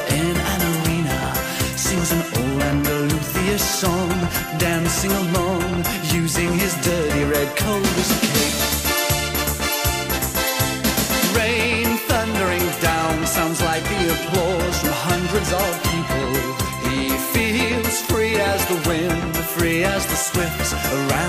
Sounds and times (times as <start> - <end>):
Music: 0.0 - 21.2.